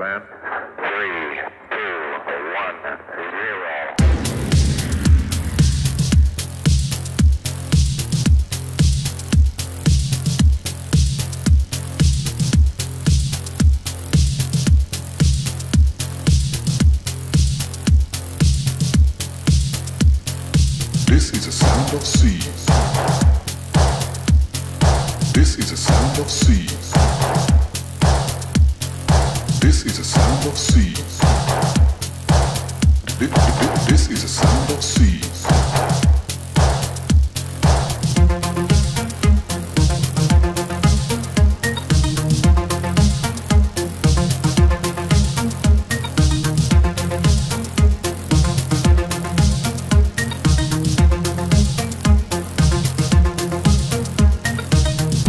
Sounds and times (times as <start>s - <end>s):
Music: 3.9s - 55.2s.